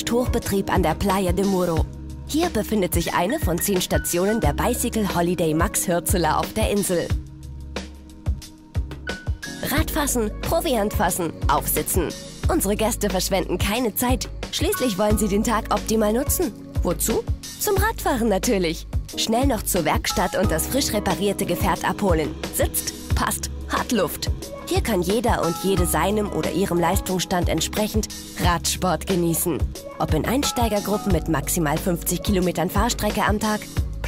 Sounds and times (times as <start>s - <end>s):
Speech: 0.0s - 7.1s, 9.6s - 33.7s
Music: 0.0s - 34.0s.